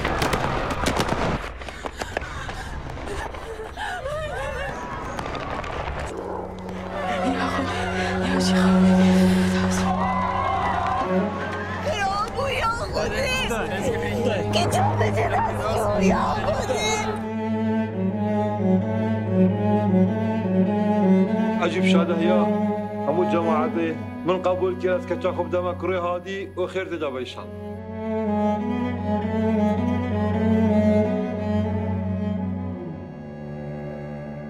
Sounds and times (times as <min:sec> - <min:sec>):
Music: 0:05.4 - 0:34.4.